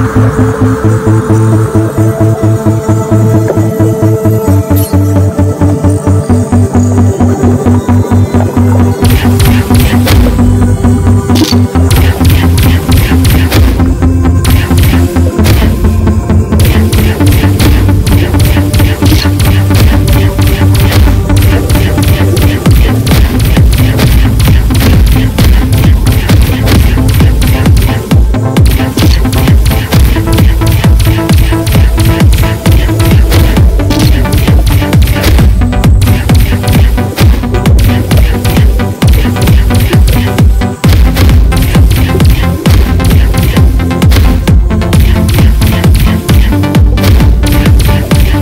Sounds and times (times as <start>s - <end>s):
Music: 0.0s - 48.4s.